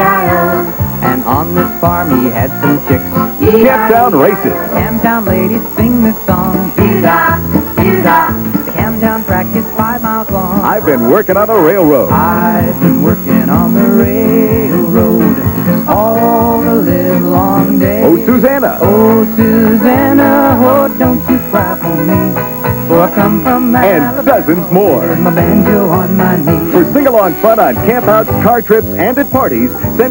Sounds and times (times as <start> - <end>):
Music: 0.0 - 30.1.